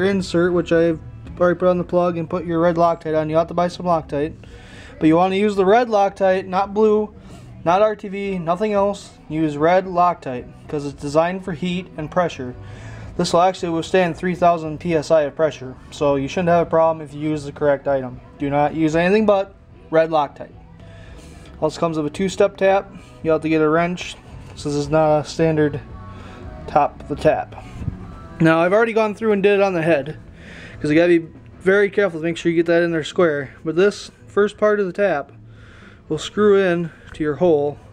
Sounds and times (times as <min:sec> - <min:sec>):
Speech: 0:00.0 - 0:04.4, 0:05.0 - 0:12.6, 0:13.2 - 0:20.5, 0:21.6 - 0:25.8, 0:26.7 - 0:27.6, 0:28.4 - 0:30.2, 0:30.8 - 0:35.3, 0:36.1 - 0:37.8.